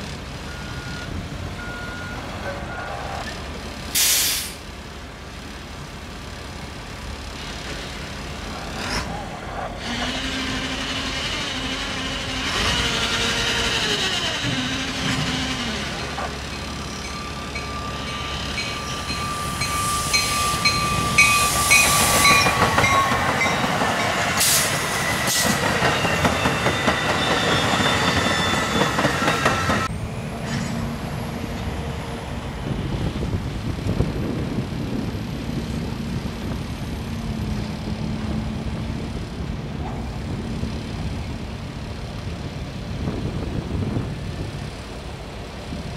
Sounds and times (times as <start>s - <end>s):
Outside, rural or natural: 0.0s - 45.9s
Railroad car, train wagon: 0.0s - 45.9s
Train: 0.0s - 45.9s.